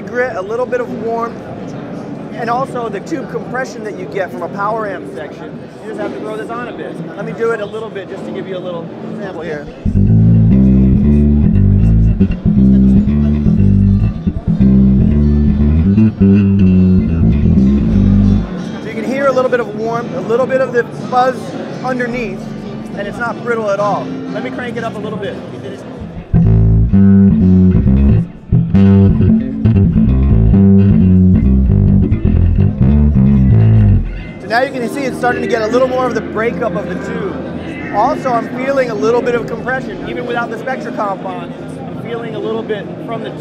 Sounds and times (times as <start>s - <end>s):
Speech: 0.0s - 9.9s, 18.8s - 26.2s, 34.4s - 43.4s
Bass guitar: 9.8s - 18.7s, 26.0s - 34.4s.